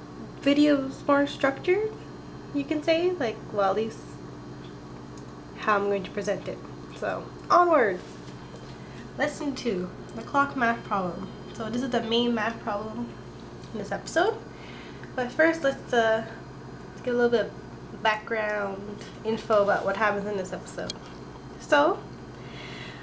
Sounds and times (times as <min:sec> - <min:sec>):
Speech: 0:00.4 - 0:04.2, 0:05.6 - 0:08.2, 0:09.2 - 0:14.4, 0:15.2 - 0:16.4, 0:17.0 - 0:21.0, 0:21.6 - 0:22.0.